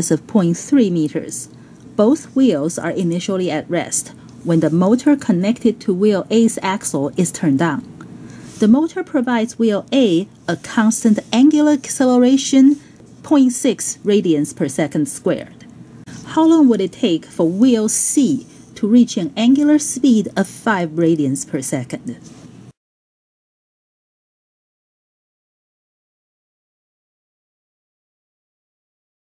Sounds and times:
Speech: 0.0 - 7.9, 8.6 - 22.3.

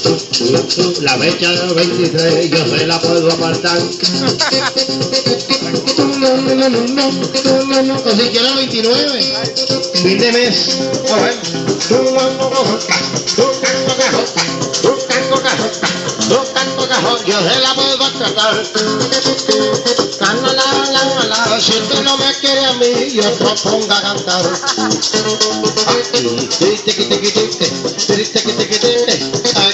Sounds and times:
Singing: 0.0 - 4.0, 5.2 - 9.4, 10.0 - 18.8, 20.2 - 29.7
Maraca: 0.0 - 29.7
Plucked string instrument: 0.2 - 29.7.

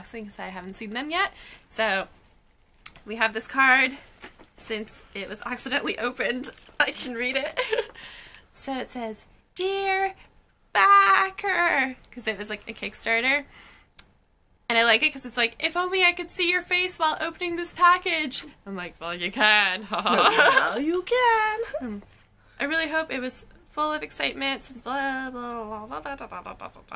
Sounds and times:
Speech: 8.6 - 10.2, 10.8 - 13.4, 14.7 - 22.0, 22.6 - 26.9.

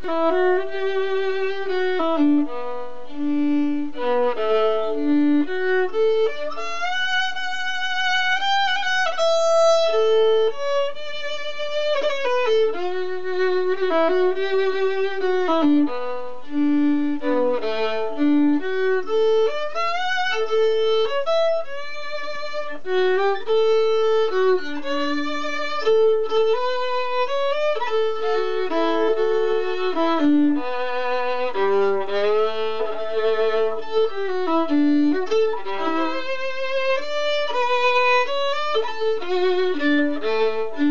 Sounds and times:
Violin, fiddle: 0.0 - 40.9.

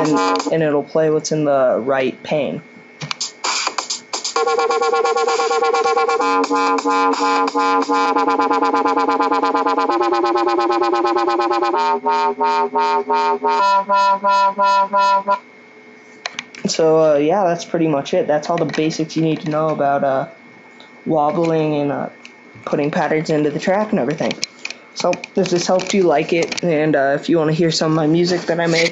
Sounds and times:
Dubstep: 0.0 - 0.5, 3.1 - 15.4.

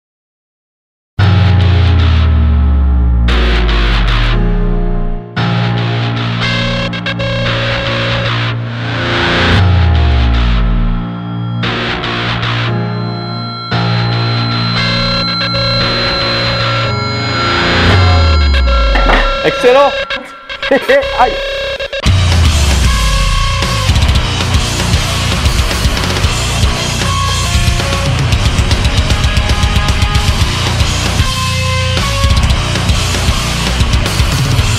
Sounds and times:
Heavy metal: 5.4 - 34.7.

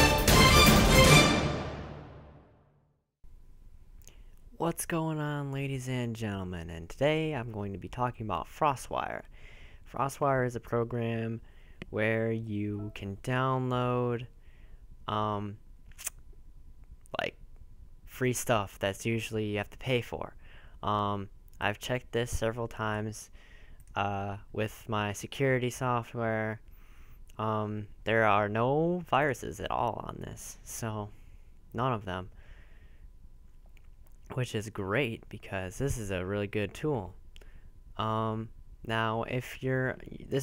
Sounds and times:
Speech: 4.6 - 9.3, 9.9 - 14.3, 15.1 - 15.6, 17.1 - 17.4, 18.1 - 26.6, 27.3 - 32.3, 34.3 - 37.2, 38.0 - 40.4.

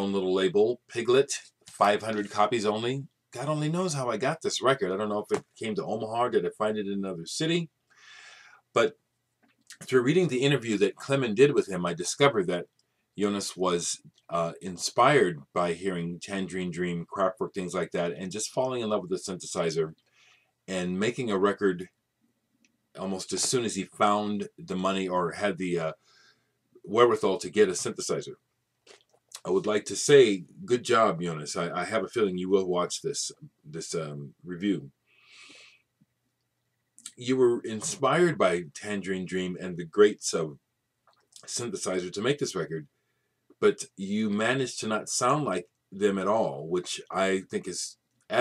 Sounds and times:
Speech: 0.0 - 7.8, 8.8 - 9.0, 9.7 - 20.0, 20.7 - 21.9, 23.0 - 26.0, 26.8 - 28.4, 29.4 - 35.0, 37.0 - 40.6, 41.4 - 42.9, 43.6 - 48.4.

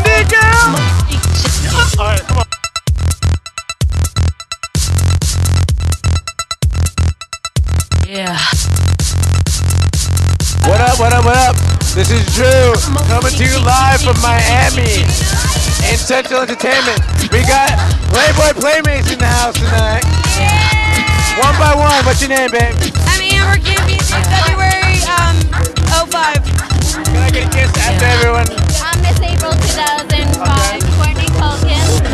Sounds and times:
Music: 0.0 - 32.1.

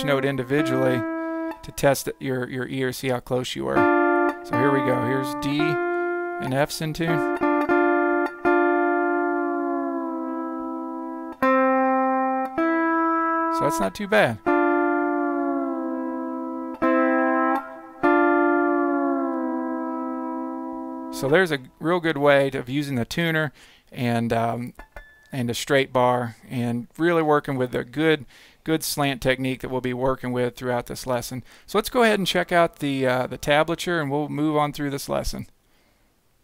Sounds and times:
Steel guitar, slide guitar: 0.0 - 1.7, 3.8 - 21.5
Bowed string instrument: 3.8 - 21.5.

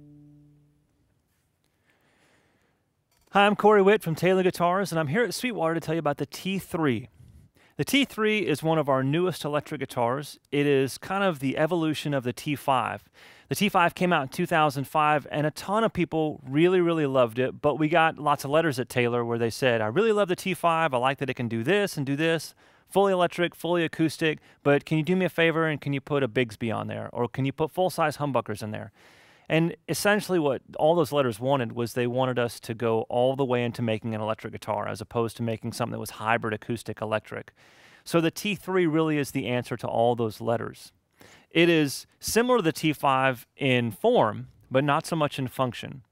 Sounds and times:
Speech: 3.3 - 7.2, 7.8 - 28.9, 29.5 - 40.9, 41.5 - 46.1.

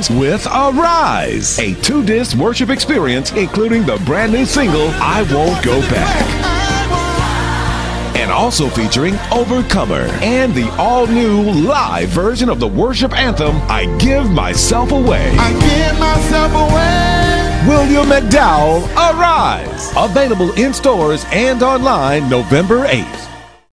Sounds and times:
Speech: 0.0 - 6.4, 8.2 - 15.6, 17.6 - 23.4
Music: 0.0 - 23.7.

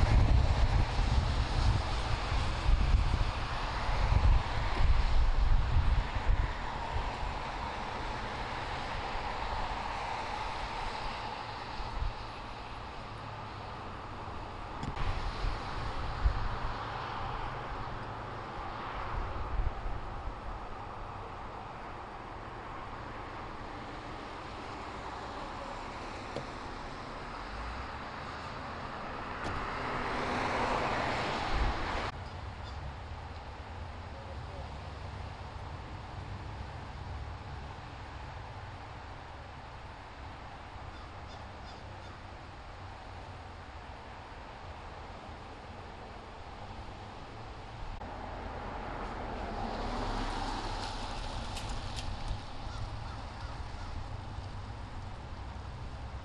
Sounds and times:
Vehicle: 0.0 - 56.2.

